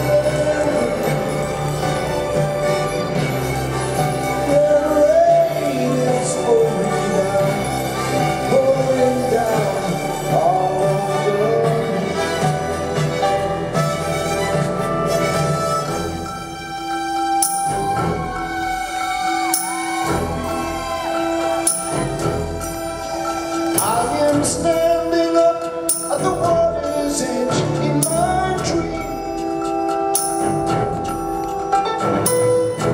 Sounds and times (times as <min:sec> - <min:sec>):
Orchestra: 0:00.0 - 0:32.9.